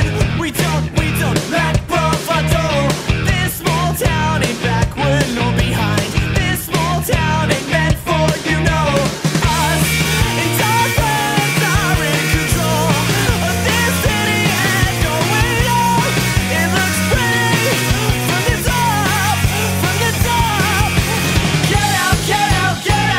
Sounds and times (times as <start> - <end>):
Pop music: 0.0 - 23.1.